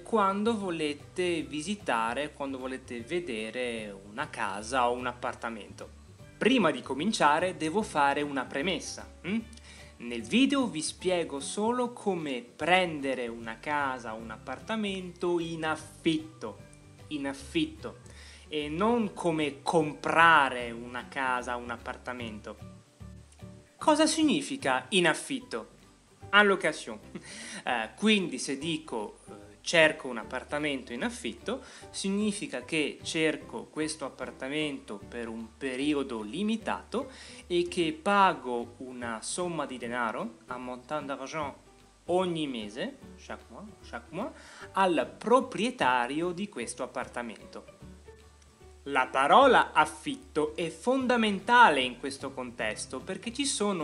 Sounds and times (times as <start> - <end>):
Speech: 0.0 - 22.7, 23.8 - 25.7, 26.3 - 47.7, 48.9 - 53.8
Music: 0.0 - 53.8.